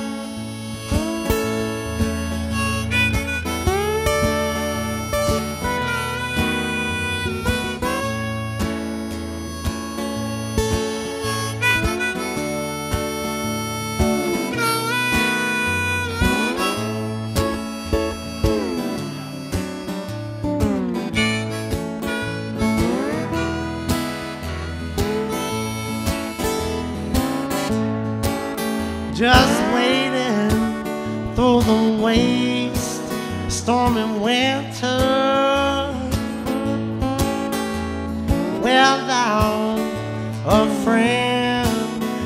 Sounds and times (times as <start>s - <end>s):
Music: 0.0s - 42.2s.